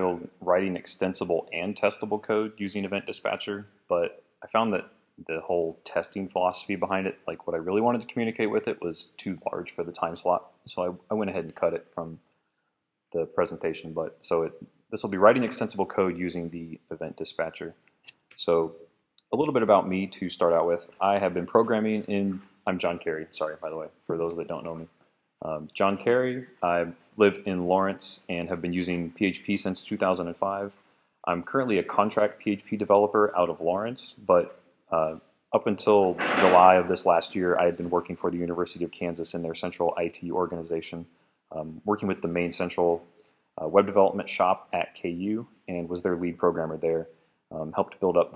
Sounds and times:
Speech: 0:00.0 - 0:12.2, 0:13.2 - 0:48.3.

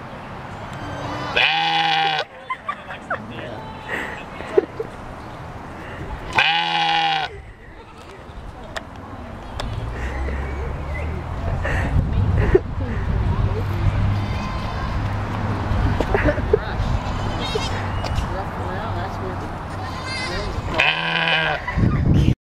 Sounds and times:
Bleat: 0:01.0 - 0:02.3, 0:06.4 - 0:07.3, 0:16.9 - 0:17.8, 0:19.9 - 0:21.7.

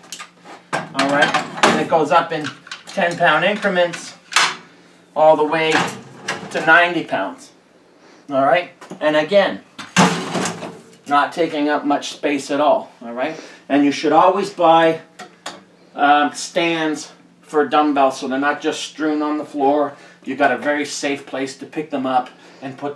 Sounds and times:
Speech: 0:00.9 - 0:04.2, 0:05.2 - 0:05.9, 0:06.5 - 0:07.6, 0:08.3 - 0:09.6, 0:11.1 - 0:15.1, 0:16.0 - 0:22.9.

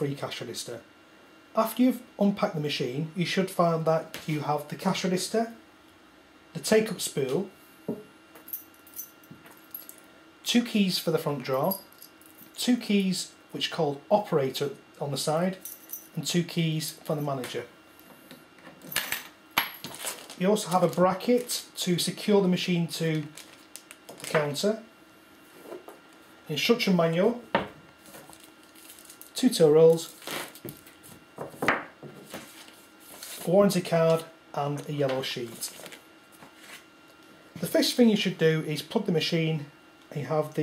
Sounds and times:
Speech: 0:00.0 - 0:00.9, 0:01.6 - 0:05.6, 0:06.5 - 0:07.5, 0:10.4 - 0:11.8, 0:12.6 - 0:15.6, 0:16.2 - 0:17.8, 0:20.4 - 0:23.4, 0:24.3 - 0:24.9, 0:26.5 - 0:27.5, 0:29.4 - 0:30.2, 0:33.4 - 0:35.8, 0:37.6 - 0:40.6.

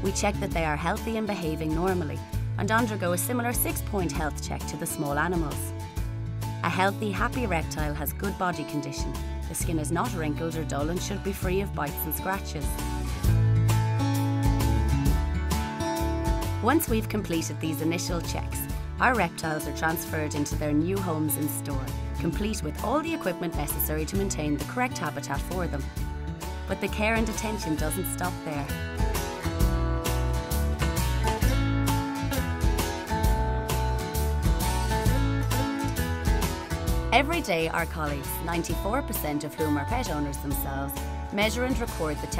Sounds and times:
Speech: 0:00.0 - 0:05.7, 0:06.6 - 0:12.8, 0:16.6 - 0:25.9, 0:26.7 - 0:28.7, 0:37.1 - 0:42.3
Music: 0:00.0 - 0:42.3.

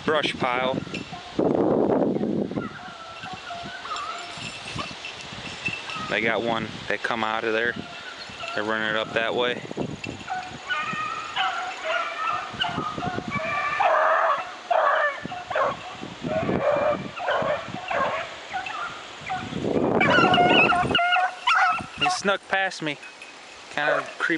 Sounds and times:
Speech: 0:00.0 - 0:00.8, 0:06.1 - 0:07.8, 0:08.6 - 0:09.6, 0:22.0 - 0:23.0, 0:23.8 - 0:24.3
Outside, rural or natural: 0:00.0 - 0:24.3
Animal: 0:02.6 - 0:04.9, 0:10.3 - 0:22.2.

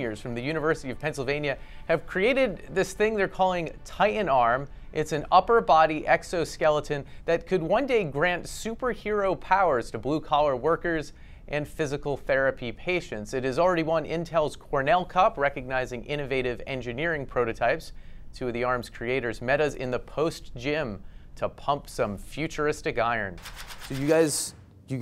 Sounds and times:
Speech: 0:00.0 - 0:25.0.

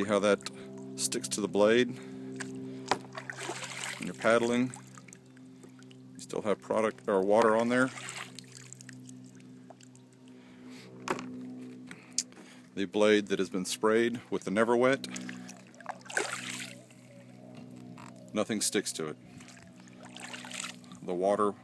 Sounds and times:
Speech: 0:00.0 - 0:00.4, 0:01.0 - 0:02.0, 0:04.0 - 0:04.8, 0:06.2 - 0:08.0, 0:12.8 - 0:15.1, 0:18.4 - 0:19.2, 0:21.0 - 0:21.6.

